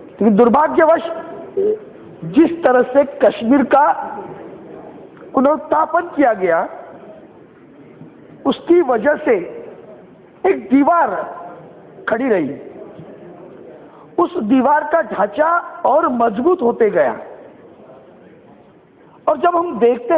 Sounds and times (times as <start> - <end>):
Narration, monologue: 0.0 - 20.1
Male speech, man speaking: 0.2 - 1.3, 2.3 - 4.3, 5.3 - 6.8, 8.4 - 9.6, 10.4 - 12.7, 14.2 - 17.4, 19.2 - 20.1.